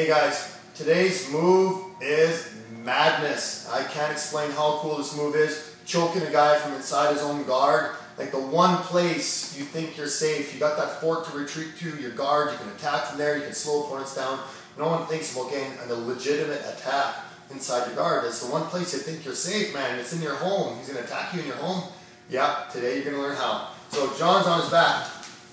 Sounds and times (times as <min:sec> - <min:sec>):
Speech: 0:00.0 - 0:25.2.